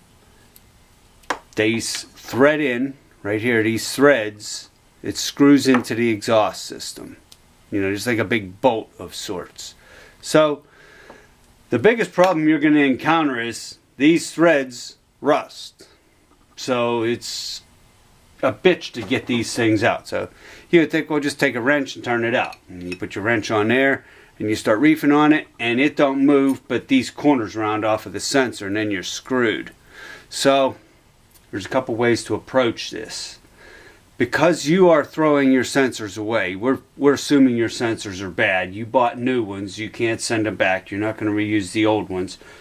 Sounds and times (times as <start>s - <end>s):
Speech: 1.6s - 10.7s, 11.7s - 16.0s, 16.6s - 17.7s, 18.4s - 30.8s, 31.4s - 33.4s, 34.2s - 42.4s.